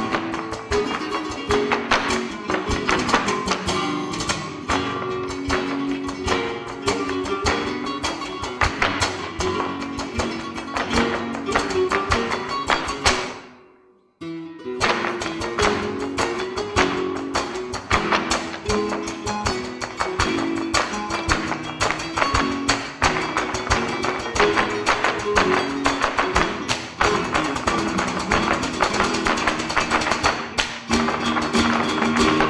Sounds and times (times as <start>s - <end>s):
Guitar: 0.0s - 32.5s.